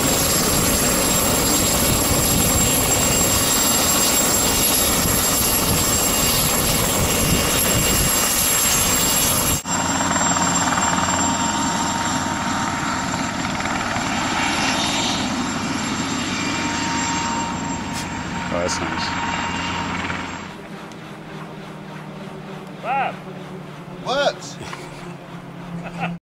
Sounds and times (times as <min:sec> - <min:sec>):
Speech: 0:22.8 - 0:23.2, 0:24.0 - 0:24.6.